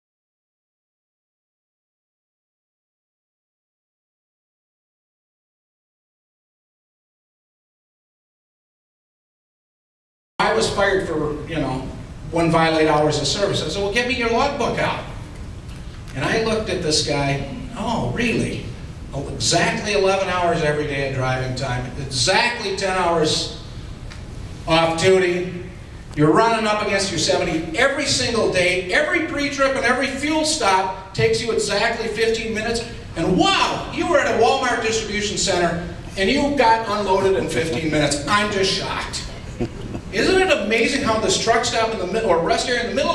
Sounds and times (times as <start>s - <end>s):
Speech: 10.4s - 15.2s, 16.2s - 23.6s, 24.7s - 39.4s, 40.1s - 43.1s.